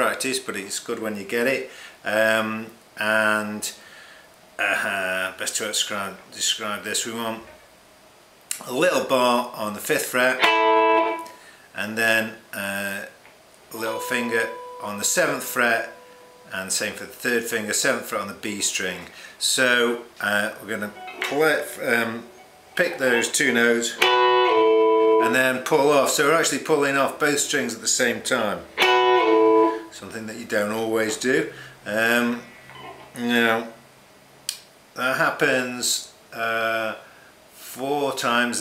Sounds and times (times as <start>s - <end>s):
Speech: 0.0s - 3.8s, 4.6s - 7.6s, 8.5s - 10.5s, 11.8s - 24.0s, 25.2s - 28.7s, 29.9s - 32.4s, 33.2s - 33.8s, 35.0s - 37.0s, 37.6s - 38.6s
Electric guitar: 10.3s - 11.4s, 13.7s - 16.5s, 20.9s - 25.6s, 28.7s - 29.9s
Rock music: 10.4s - 11.3s, 24.0s - 25.4s, 28.8s - 29.8s.